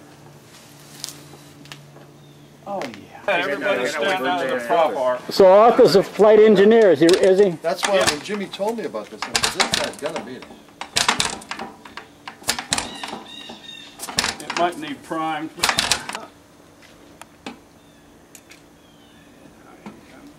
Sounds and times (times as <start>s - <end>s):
Speech: 2.7s - 10.5s, 14.4s - 16.3s.